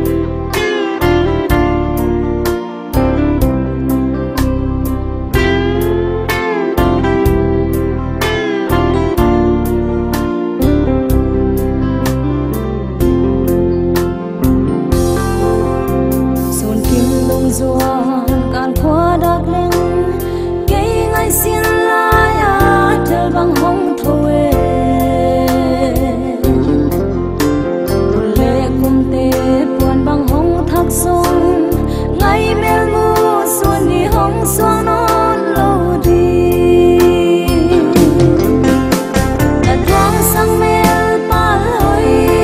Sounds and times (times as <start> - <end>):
Music: 0.0 - 42.4.